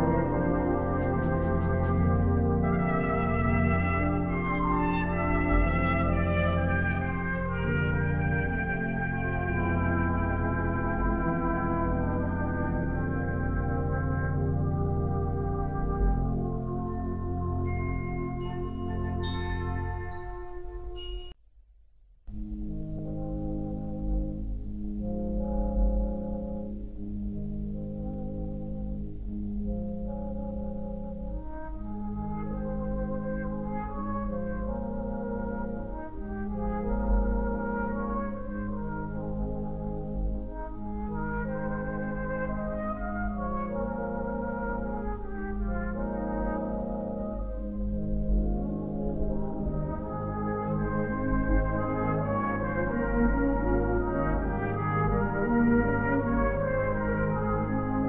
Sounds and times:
Music: 0.0s - 21.4s, 22.0s - 58.0s.

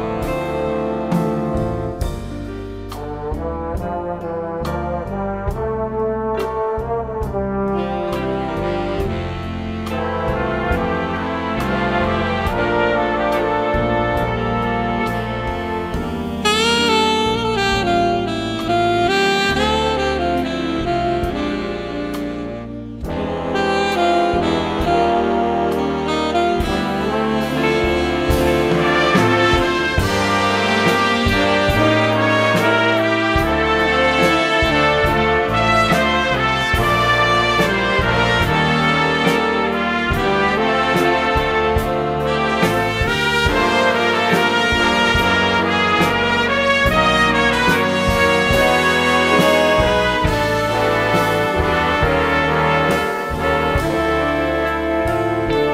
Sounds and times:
Brass instrument: 0.0s - 55.7s
Classical music: 0.0s - 55.7s
Jazz: 0.0s - 55.7s
Orchestra: 0.0s - 55.7s.

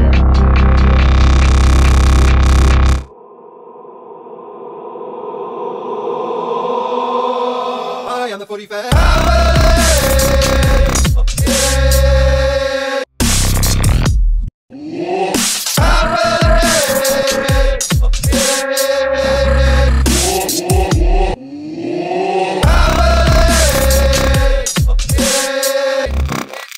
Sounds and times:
Dubstep: 0.0s - 3.1s, 9.0s - 12.3s, 13.2s - 14.1s, 15.4s - 21.2s, 22.6s - 26.7s.

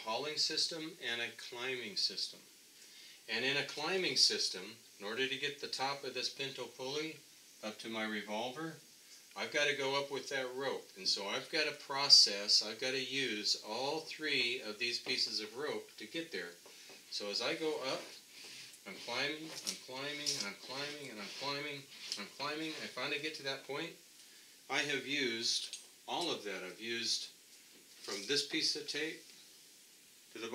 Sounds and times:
Speech: 0.0s - 2.4s, 3.3s - 8.8s, 9.4s - 18.2s, 18.8s - 24.0s, 24.7s - 27.4s, 28.0s - 29.2s
Inside, small room: 0.0s - 30.5s.

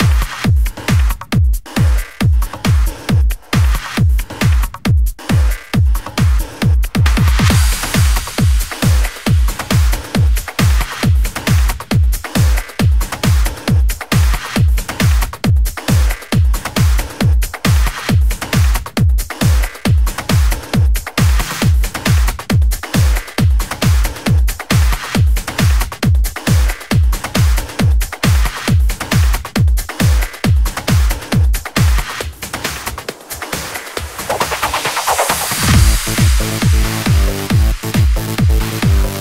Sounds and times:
Music: 0.0s - 39.2s.

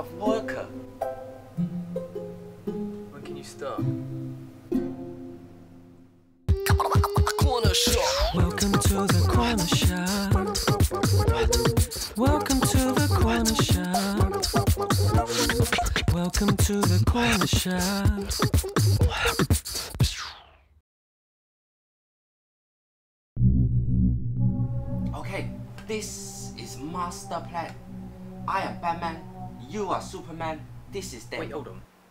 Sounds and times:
Beatboxing: 6.5s - 20.6s.

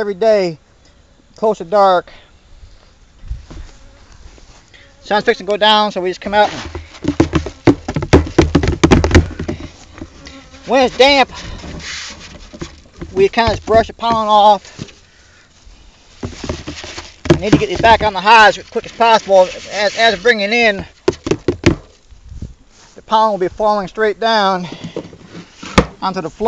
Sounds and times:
Bee, wasp, etc.: 0.0s - 26.4s
Speech: 1.4s - 2.2s, 5.0s - 6.6s, 10.7s - 11.3s, 13.1s - 14.7s, 17.4s - 20.9s, 23.0s - 24.7s, 26.0s - 26.4s.

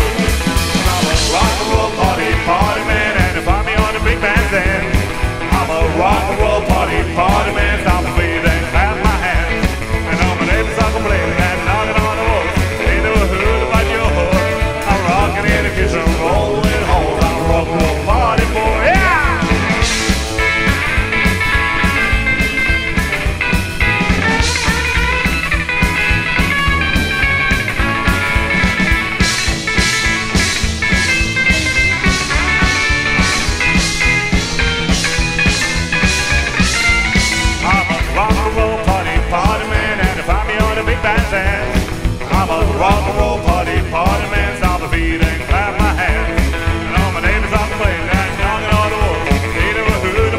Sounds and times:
Drum: 0.0s - 50.3s
Drum kit: 0.0s - 50.3s
Psychedelic rock: 0.0s - 50.3s
Rock and roll: 0.0s - 50.3s.

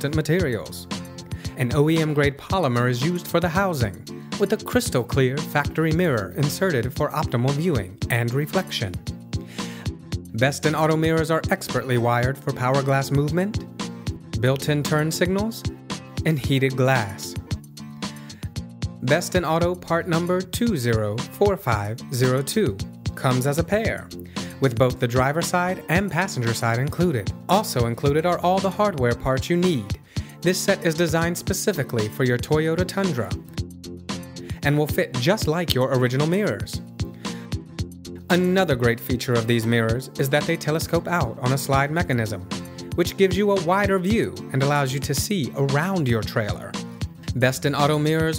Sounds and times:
Speech: 0.0s - 0.9s, 1.5s - 9.0s, 10.3s - 13.7s, 14.4s - 17.5s, 19.0s - 33.4s, 34.6s - 36.8s, 38.3s - 48.3s
Music: 0.0s - 48.3s.

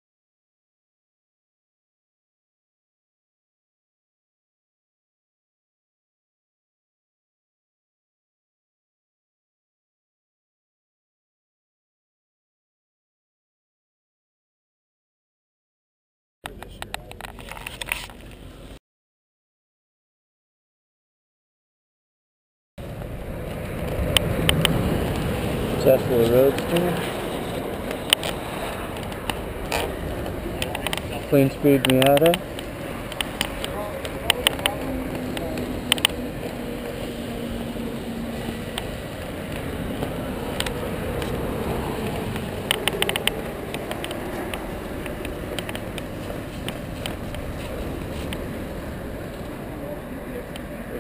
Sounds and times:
Speech: 16.5s - 17.4s, 25.8s - 27.1s, 31.1s - 32.4s, 33.7s - 35.8s, 49.6s - 51.0s.

